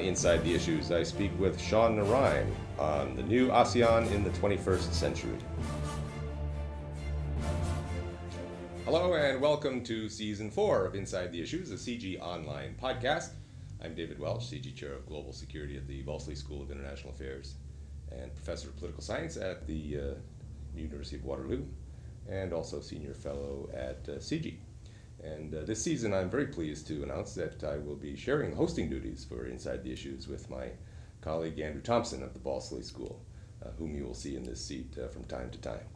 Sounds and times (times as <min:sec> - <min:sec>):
Speech: 0:00.0 - 0:05.4, 0:08.9 - 0:24.6, 0:25.2 - 0:35.9
Music: 0:00.0 - 0:09.6.